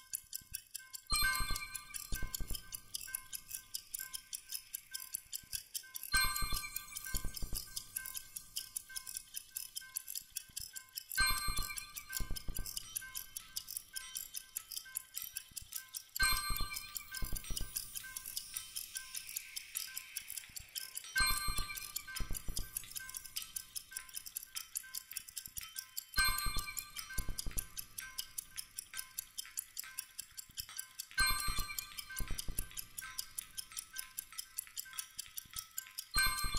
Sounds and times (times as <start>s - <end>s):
Music: 0.0s - 36.5s
Tick: 0.0s - 36.5s.